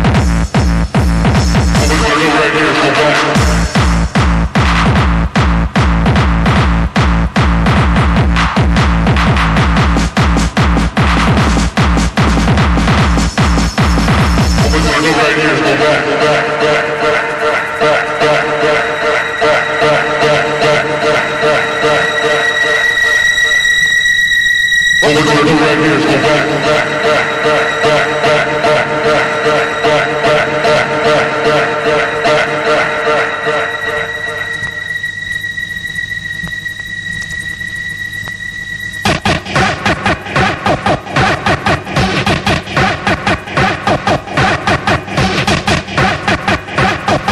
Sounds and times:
Music: 0.0 - 47.3
Radio: 1.8 - 4.0, 14.4 - 23.7, 25.0 - 34.9, 39.1 - 47.3.

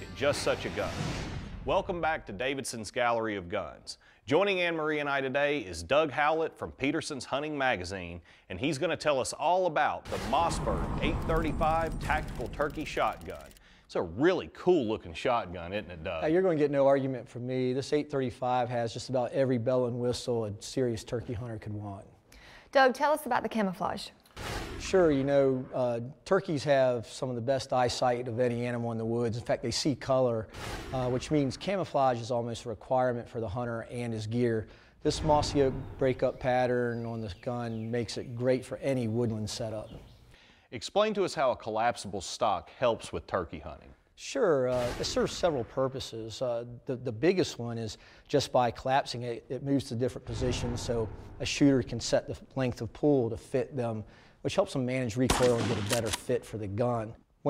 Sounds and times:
Speech: 0.0 - 1.0, 1.7 - 22.1, 24.8 - 40.0, 40.7 - 57.4.

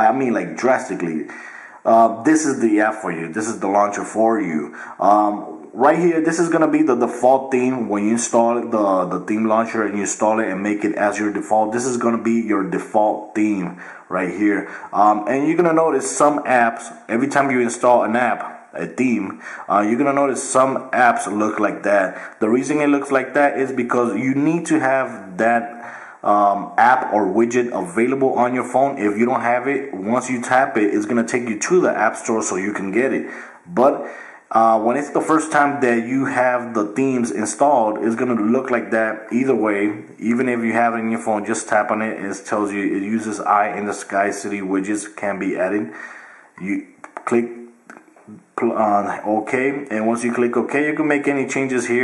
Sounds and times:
Speech: 0.0 - 46.0, 46.6 - 52.0.

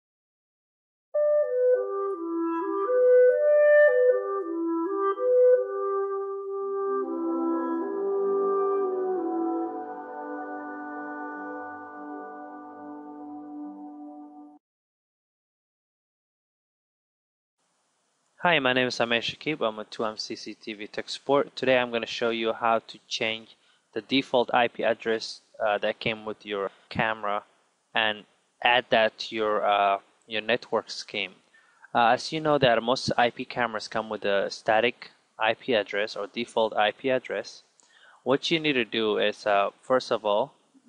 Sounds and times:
Speech: 18.4 - 27.4, 28.0 - 37.6, 38.2 - 40.5.

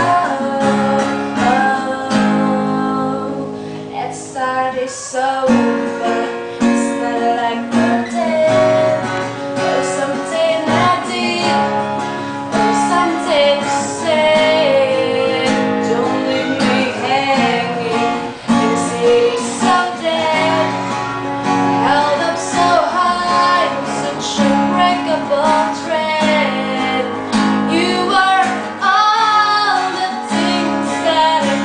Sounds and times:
Acoustic guitar: 0.0 - 31.6
Strum: 0.0 - 31.6.

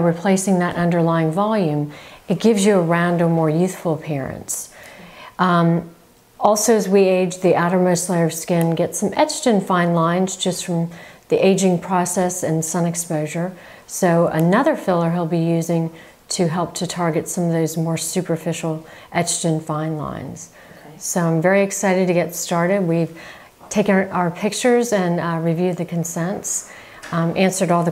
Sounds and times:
Speech: 0.0 - 4.8, 5.4 - 27.9.

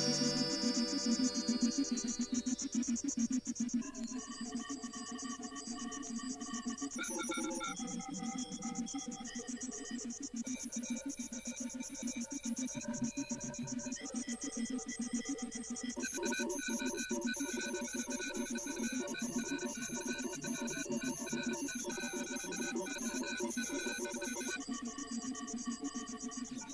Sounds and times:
Music: 0.0 - 2.6.

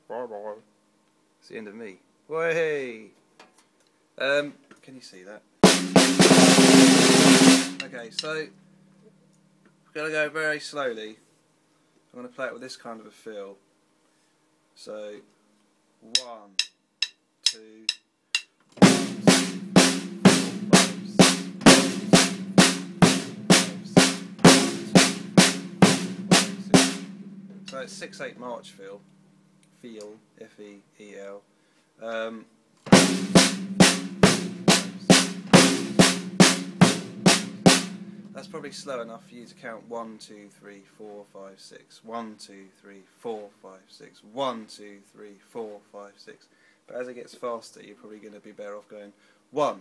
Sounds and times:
Speech: 0.0 - 0.7, 1.4 - 3.2, 4.2 - 5.5, 7.8 - 8.6, 9.9 - 11.2, 12.1 - 13.6, 14.8 - 15.3, 16.0 - 16.6, 17.5 - 18.0, 23.4 - 24.1, 27.7 - 29.0, 29.8 - 32.5, 38.4 - 49.8
Drum: 5.6 - 8.4, 16.2 - 28.4, 32.9 - 39.4.

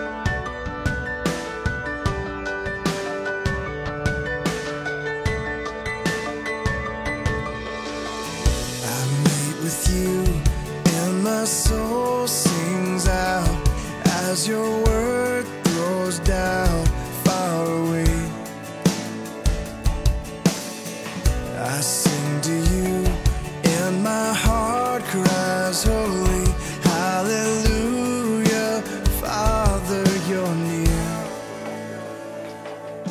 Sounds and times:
Independent music: 0.0 - 33.1.

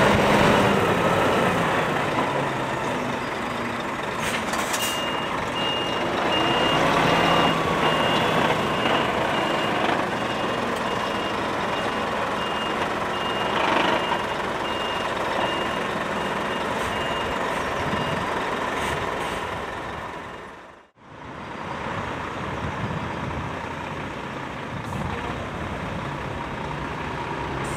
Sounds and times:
Reversing beeps: 4.9 - 18.3.

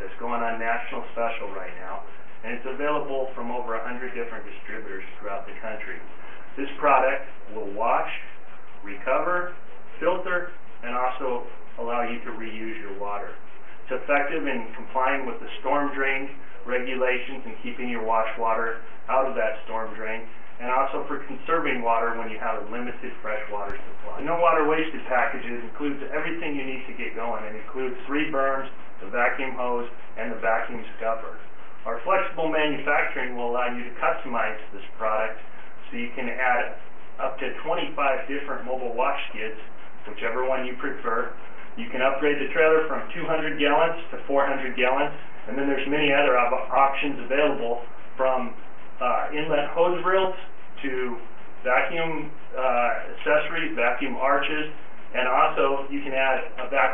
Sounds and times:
Speech: 0.0 - 56.9.

